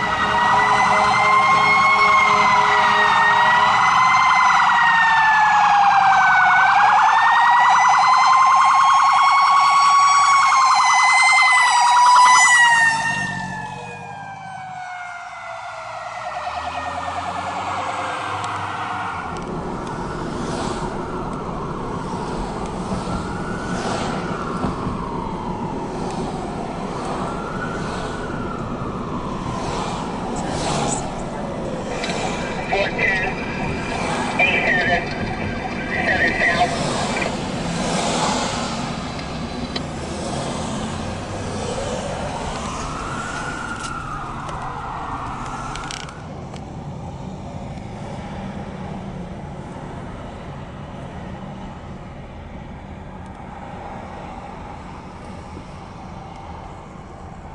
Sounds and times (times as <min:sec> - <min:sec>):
Police car (siren): 0:00.0 - 0:39.8, 0:40.5 - 0:47.2.